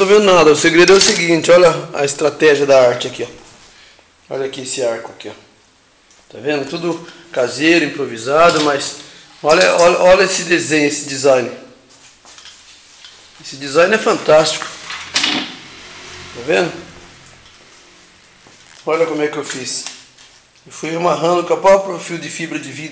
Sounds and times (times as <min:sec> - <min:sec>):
Speech: 0:00.0 - 0:03.4, 0:04.3 - 0:05.5, 0:06.3 - 0:11.8, 0:13.4 - 0:14.7, 0:16.4 - 0:16.9, 0:18.8 - 0:20.0, 0:20.7 - 0:22.9.